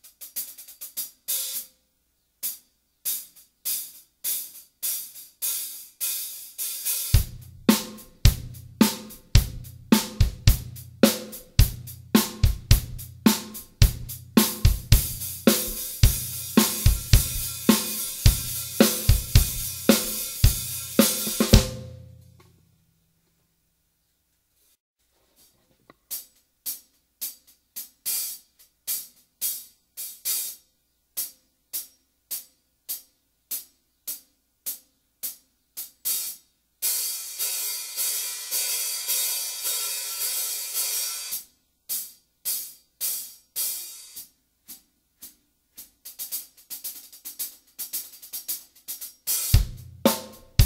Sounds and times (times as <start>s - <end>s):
Music: 0.0s - 23.0s, 25.4s - 50.6s.